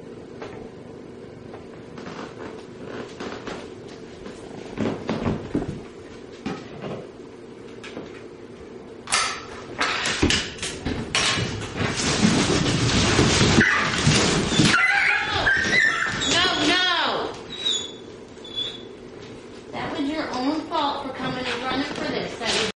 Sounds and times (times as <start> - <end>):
Whimper (dog): 14.5 - 16.7, 17.5 - 18.9
Yip: 14.6 - 16.4
Speech: 16.3 - 17.4, 19.7 - 22.7.